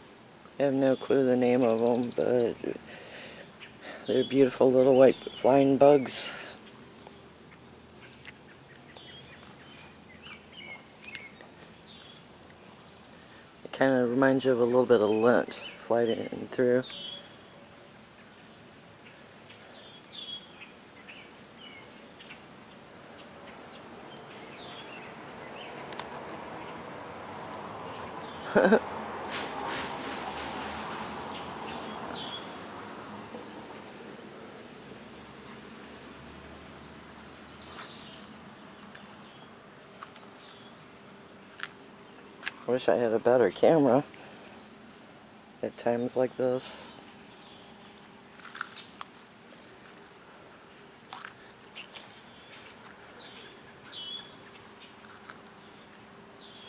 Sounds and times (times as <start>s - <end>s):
Environmental noise: 0.0s - 56.6s
Bird vocalization, bird call, bird song: 0.6s - 2.8s, 3.4s - 25.9s, 27.8s - 28.8s, 31.3s - 33.6s, 35.2s - 39.6s, 40.2s - 41.4s, 45.6s - 48.0s, 51.8s - 56.6s.